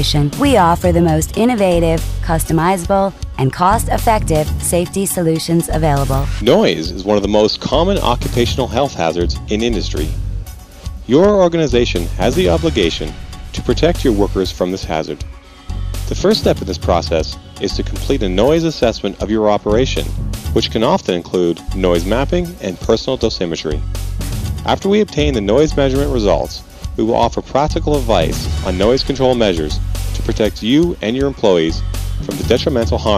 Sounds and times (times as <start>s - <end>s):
Speech: 0.0s - 10.1s, 11.1s - 15.2s, 16.1s - 23.8s, 24.7s - 33.1s
Music: 0.0s - 33.1s.